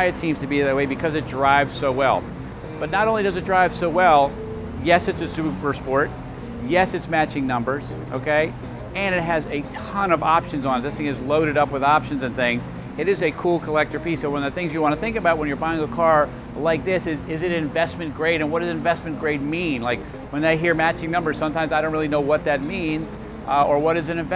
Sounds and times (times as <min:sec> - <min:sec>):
Speech: 0:00.0 - 0:02.2, 0:02.8 - 0:24.3
Music: 0:00.0 - 0:24.3.